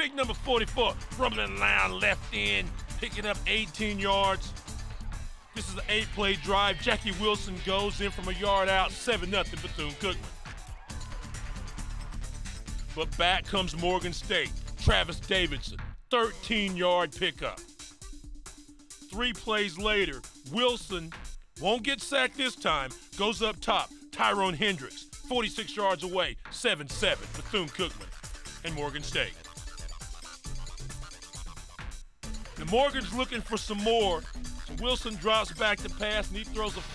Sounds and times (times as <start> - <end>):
Speech: 0.0 - 4.5, 5.6 - 10.2, 13.0 - 17.6, 19.1 - 28.0, 28.6 - 29.4, 32.6 - 36.9
Music: 0.0 - 36.9.